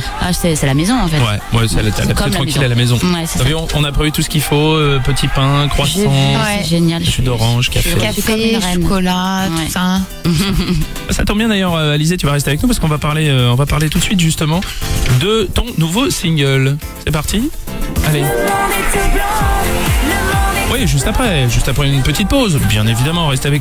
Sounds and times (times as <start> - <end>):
Speech: 0.0 - 10.0, 11.1 - 18.4, 20.7 - 23.6
Music: 0.0 - 23.6.